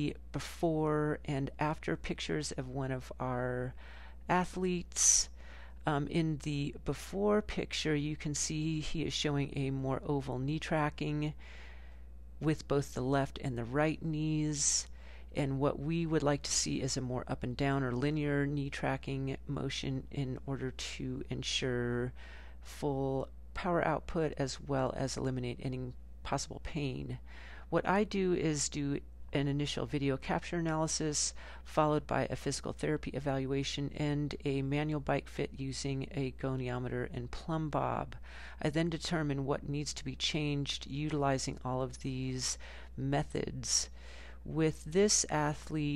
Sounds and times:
Speech: 0:00.0 - 0:11.4, 0:12.4 - 0:45.9.

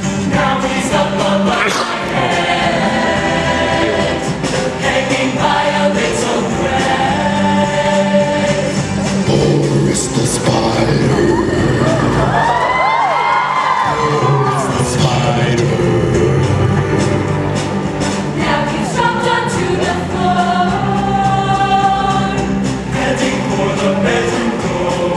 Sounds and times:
Independent music: 0:00.0 - 0:25.1.

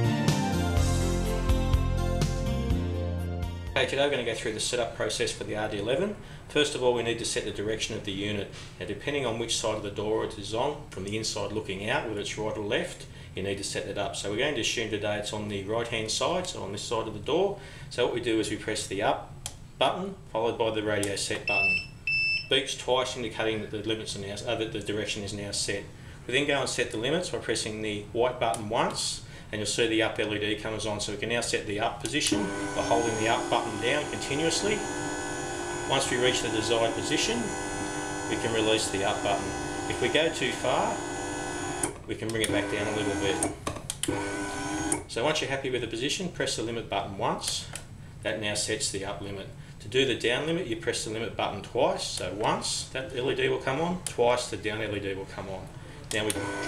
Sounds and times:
Speech: 0:03.8 - 0:21.8, 0:22.5 - 0:34.8, 0:35.9 - 0:37.5, 0:38.3 - 0:41.0, 0:42.1 - 0:43.5, 0:45.1 - 0:56.4.

